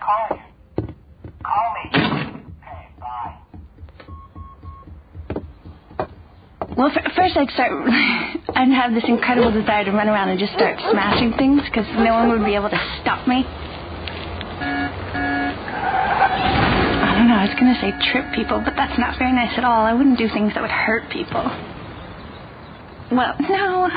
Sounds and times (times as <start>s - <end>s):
Speech: 6.8s - 7.9s, 8.5s - 13.5s, 17.0s - 21.6s, 23.1s - 23.9s.